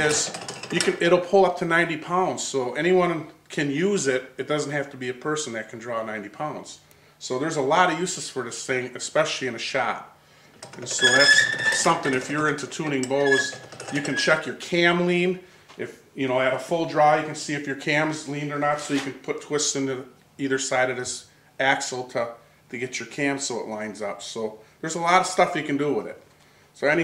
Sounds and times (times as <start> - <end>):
Speech: 0.0 - 10.2, 10.8 - 27.0.